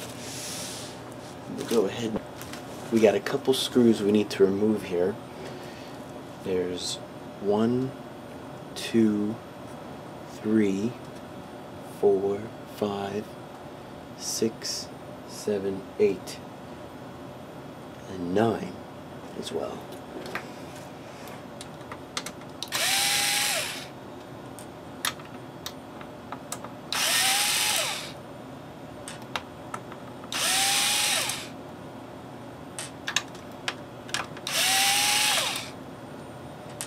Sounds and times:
Power tool: 22.7s - 23.9s, 26.9s - 28.2s, 30.3s - 31.6s, 34.5s - 35.8s.

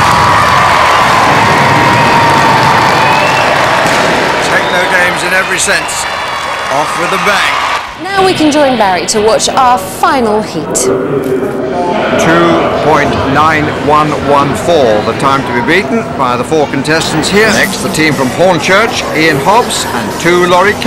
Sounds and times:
Speech: 12.1s - 20.8s.

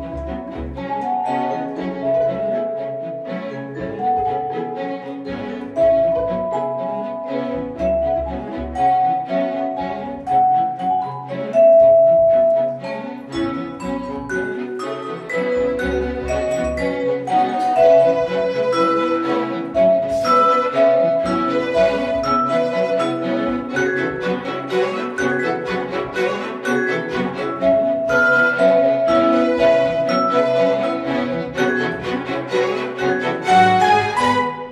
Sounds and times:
Classical music: 0.0s - 34.7s
Orchestra: 0.0s - 34.7s
Vibraphone: 0.0s - 34.7s
Violin, fiddle: 0.0s - 34.7s.

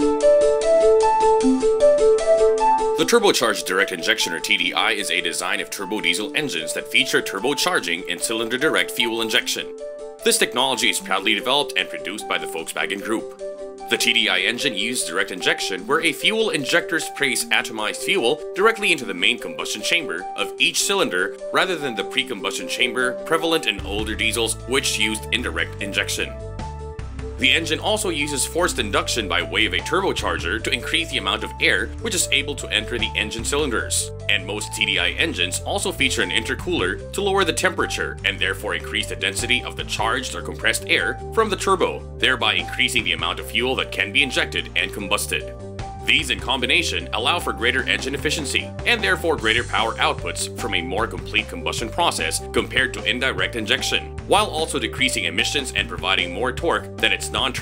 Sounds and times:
Electronic music: 0.0s - 5.2s, 24.6s - 30.3s
Speech: 3.0s - 26.4s, 27.4s - 45.5s, 46.1s - 57.6s.

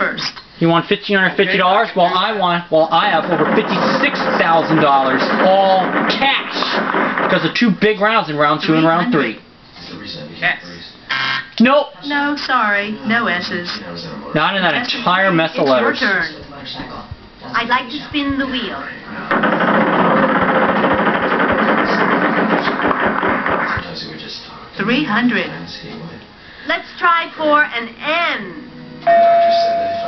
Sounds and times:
Speech: 23.8s - 26.2s.

